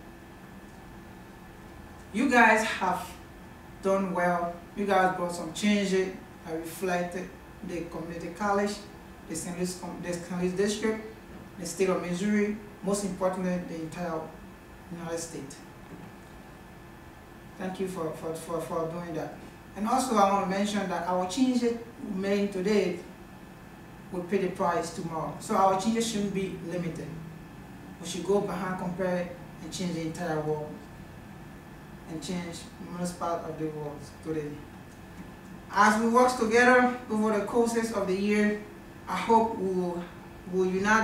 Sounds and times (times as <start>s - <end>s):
Narration, monologue: 0.0s - 41.0s
Male speech, man speaking: 2.2s - 3.2s, 3.8s - 15.6s, 17.6s - 23.1s, 24.1s - 27.2s, 28.0s - 30.8s, 32.1s - 34.6s, 35.7s - 41.0s.